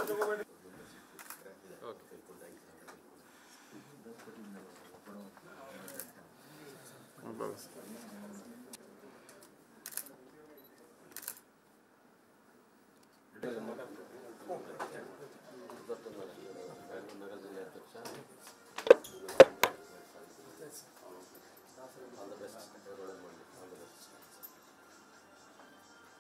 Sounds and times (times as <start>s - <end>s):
Speech: 13.4s - 18.3s, 19.2s - 24.2s
Music: 15.9s - 26.2s.